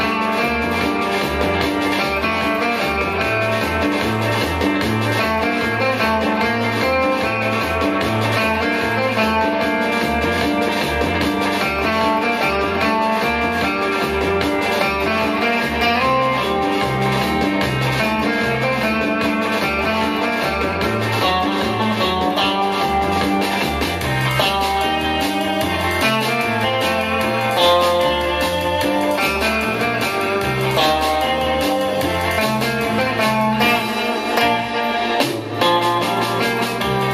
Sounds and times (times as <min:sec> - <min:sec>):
Bass guitar: 0:00.0 - 0:37.1.